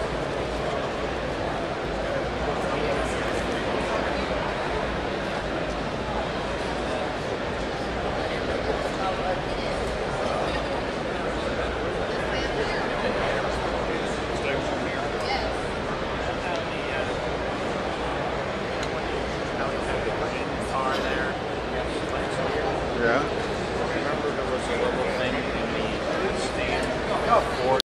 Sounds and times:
Speech: 0.0 - 27.8.

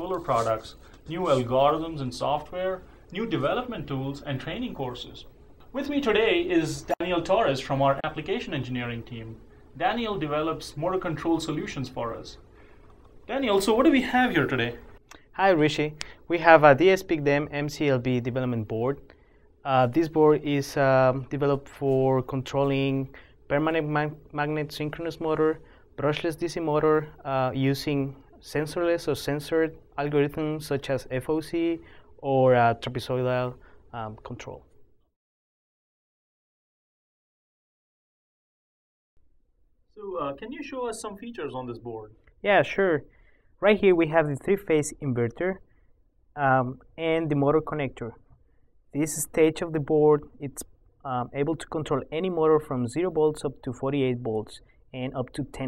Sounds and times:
Speech: 0.0 - 12.4, 13.3 - 34.7, 40.0 - 45.6, 46.4 - 48.2, 48.9 - 55.6.

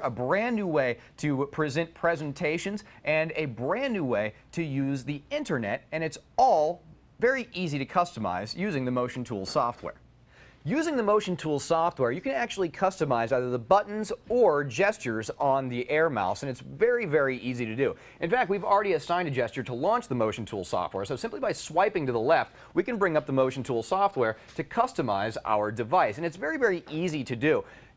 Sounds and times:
Speech: 0.0 - 10.0, 10.6 - 27.7.

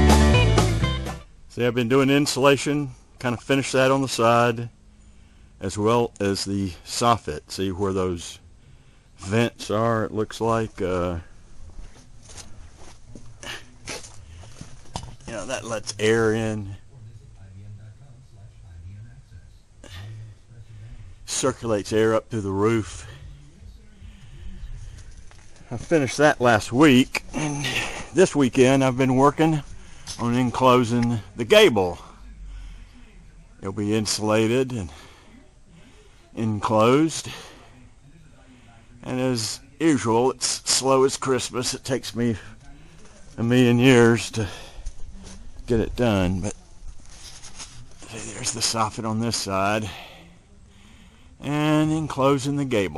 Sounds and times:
Speech: 1.5 - 4.7, 5.6 - 8.4, 9.2 - 11.3, 15.2 - 24.7, 25.6 - 46.8, 47.7 - 52.9.

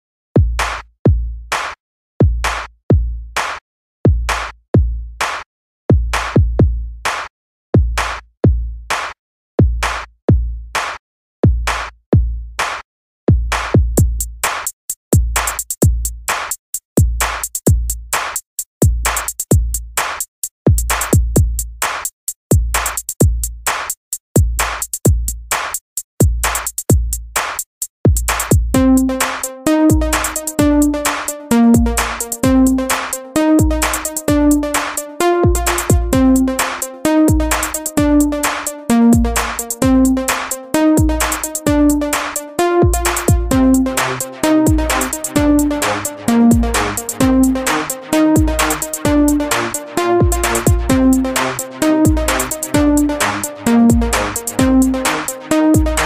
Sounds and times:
Techno: 28.4 - 56.0.

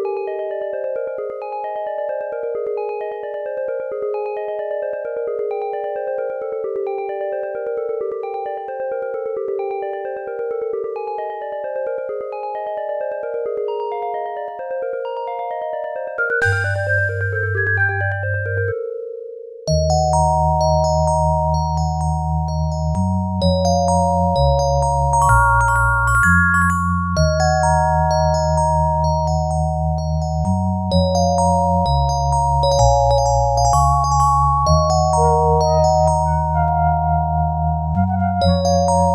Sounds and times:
Music: 0.0 - 39.1.

